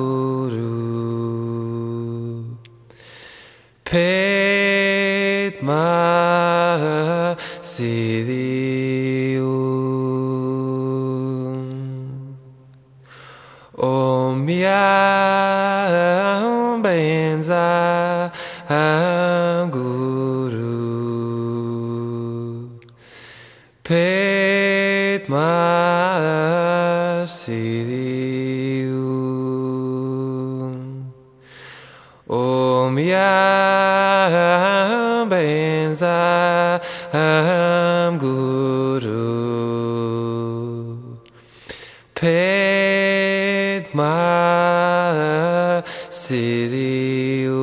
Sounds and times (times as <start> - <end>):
Mantra: 0.0 - 2.8, 3.9 - 12.4, 13.8 - 22.8, 23.8 - 31.2, 32.3 - 41.2, 42.2 - 47.6.